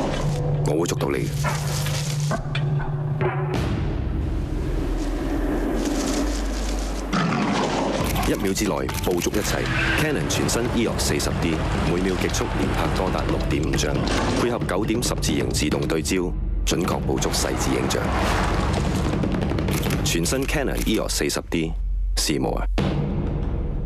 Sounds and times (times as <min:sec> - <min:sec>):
Music: 0:00.0 - 0:23.8
Speech: 0:00.6 - 0:01.4, 0:08.2 - 0:18.1, 0:20.0 - 0:22.8
Single-lens reflex camera: 0:19.7 - 0:20.0.